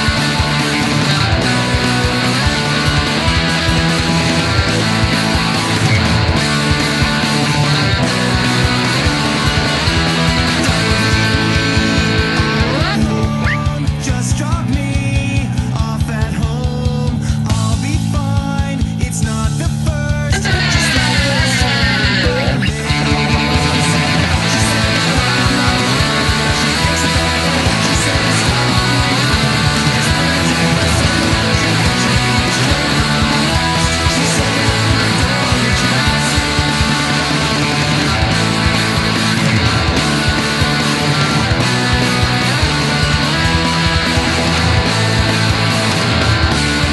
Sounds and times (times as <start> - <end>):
Strum: 0.0 - 15.7, 20.3 - 46.9
Electric guitar: 0.0 - 46.9.